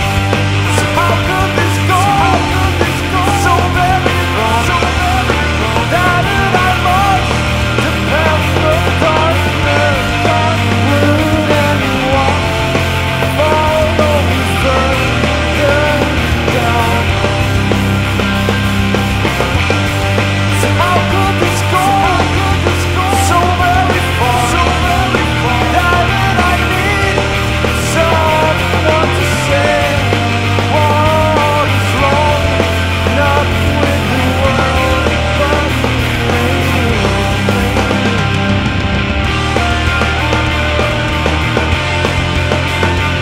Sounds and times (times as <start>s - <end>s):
Punk rock: 0.0s - 43.2s
Singing: 0.7s - 12.5s, 20.6s - 38.4s.